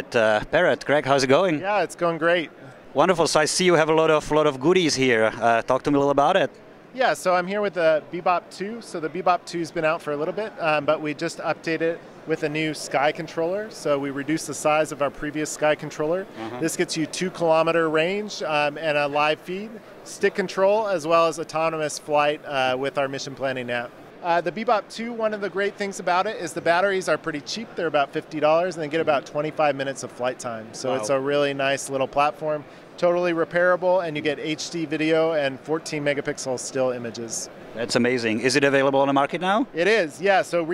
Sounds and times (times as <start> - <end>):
Speech: 0.0 - 40.7.